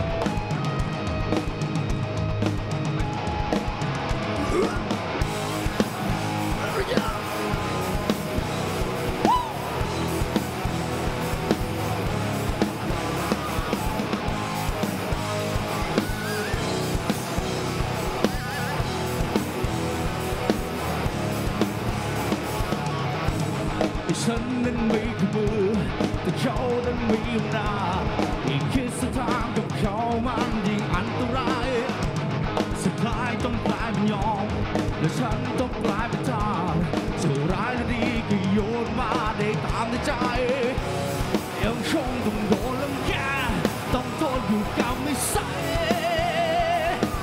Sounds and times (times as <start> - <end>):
Music: 0.0 - 47.2.